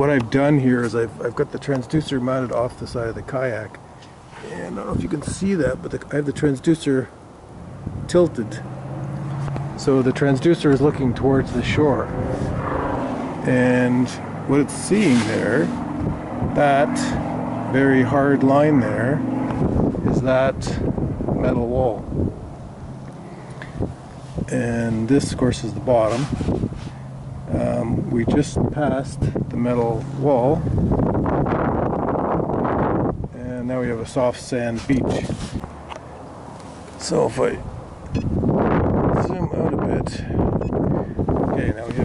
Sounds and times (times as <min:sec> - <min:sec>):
Speech: 0:00.0 - 0:03.8, 0:04.4 - 0:07.1, 0:08.1 - 0:08.7, 0:09.8 - 0:12.1, 0:13.4 - 0:15.8, 0:16.5 - 0:19.2, 0:20.0 - 0:22.0, 0:24.5 - 0:26.3, 0:27.5 - 0:30.6, 0:33.3 - 0:35.5, 0:37.0 - 0:37.6, 0:39.1 - 0:40.4, 0:41.5 - 0:42.0.